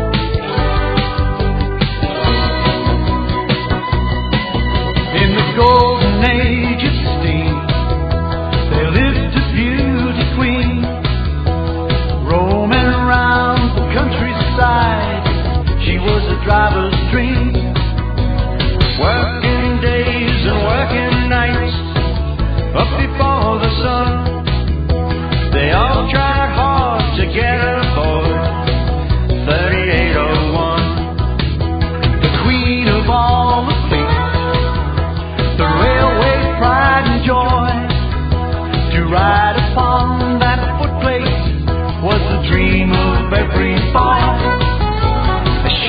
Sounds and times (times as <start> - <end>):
Dance music: 0.0 - 45.8
Independent music: 0.0 - 45.8.